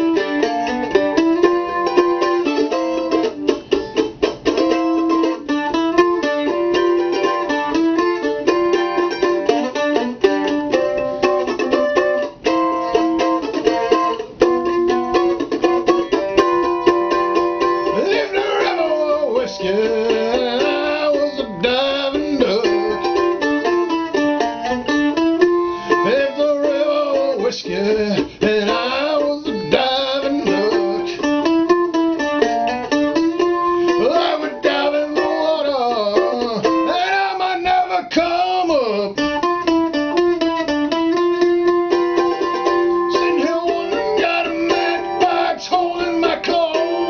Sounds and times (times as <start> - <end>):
Music: 0.0 - 47.0.